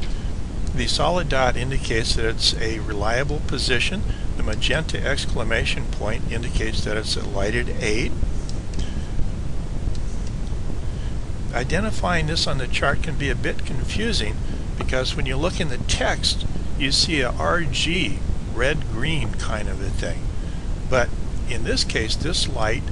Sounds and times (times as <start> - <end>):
Speech: 0.7 - 8.2, 11.5 - 20.2, 20.9 - 22.9.